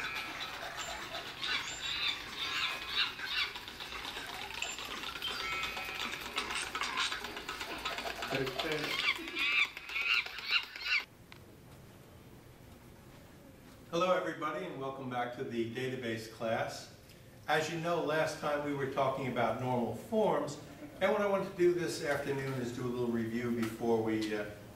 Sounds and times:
Squawk: 0.0 - 11.1
Speech: 8.3 - 9.0, 13.9 - 24.6.

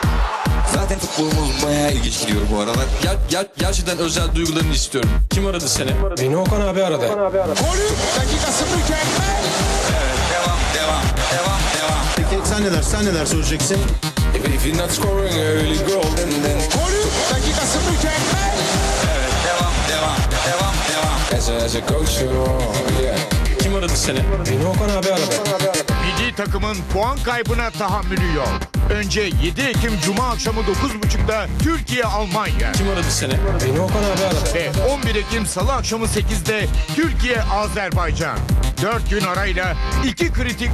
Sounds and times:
Music: 0.0 - 40.7
Speech: 0.7 - 9.0, 26.0 - 40.7.

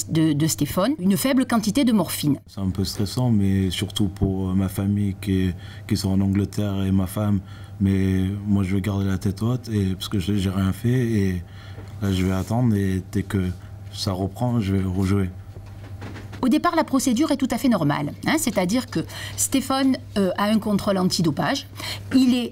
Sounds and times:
Speech: 0.0 - 11.4, 12.0 - 15.4, 16.4 - 22.5.

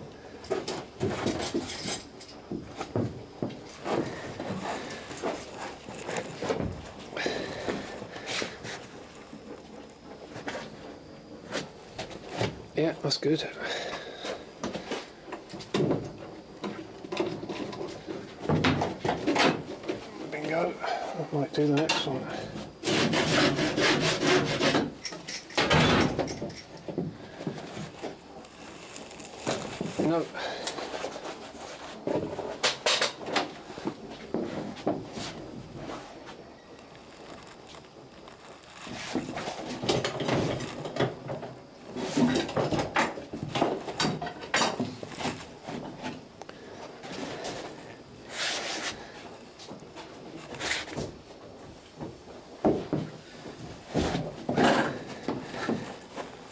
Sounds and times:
Wood: 21.7 - 35.3.

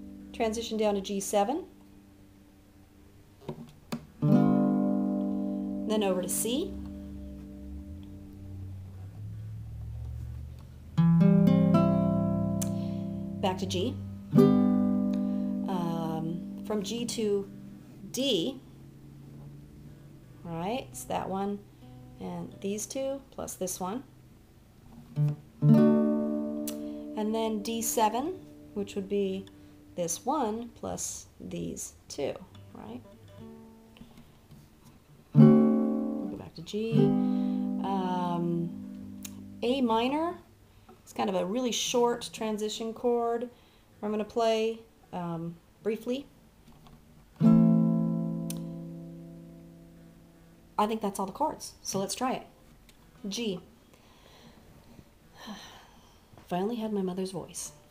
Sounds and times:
Acoustic guitar: 0.0 - 1.3, 3.4 - 23.0, 24.8 - 30.6, 32.4 - 40.4, 46.6 - 50.9
Inside, small room: 0.0 - 57.9
Speech: 0.4 - 1.7, 5.9 - 6.8, 13.4 - 14.0, 15.7 - 17.5, 18.1 - 18.6, 20.4 - 21.6, 22.2 - 24.1, 27.2 - 33.0, 36.3 - 37.1, 37.8 - 38.8, 39.6 - 40.5, 41.1 - 46.3, 50.8 - 52.5, 53.2 - 53.7, 56.4 - 57.8.

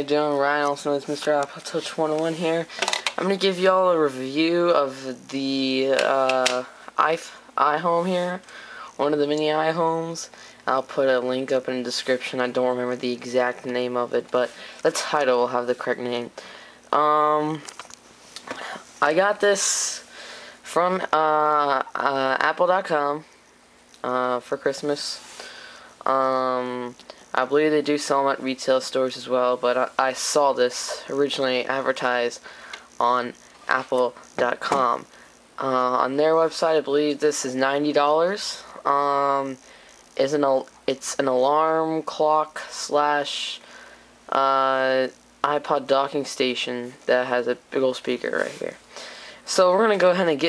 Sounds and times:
Speech: 0.0 - 17.8, 19.0 - 20.1, 20.7 - 23.3, 24.0 - 25.3, 26.0 - 32.4, 33.0 - 39.6, 40.2 - 43.6, 44.3 - 48.8, 49.5 - 50.4.

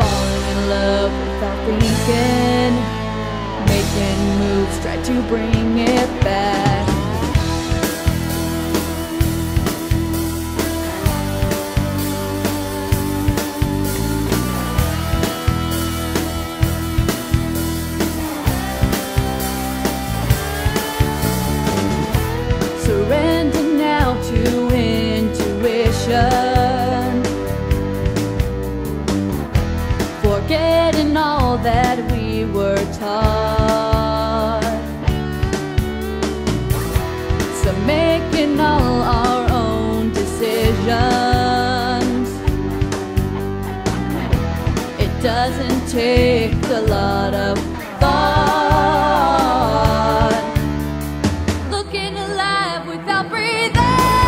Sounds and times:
Music: 0.0 - 54.2.

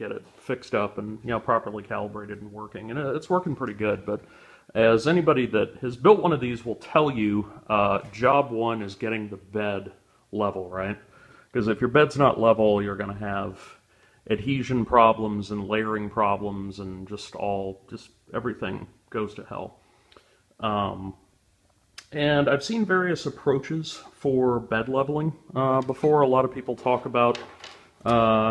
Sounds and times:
Speech: 0.0 - 19.8, 20.6 - 21.2, 22.0 - 28.5.

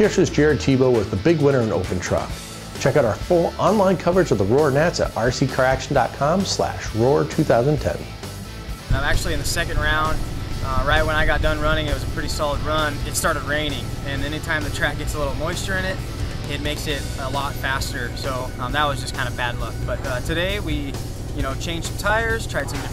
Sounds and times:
Speech: 0.0 - 8.1, 8.9 - 22.9
Music: 0.0 - 22.9.

